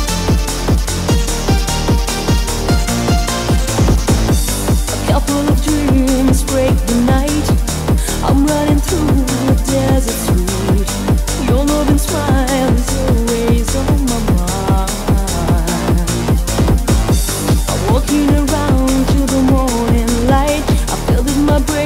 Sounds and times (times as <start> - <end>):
Music: 0.0 - 21.8.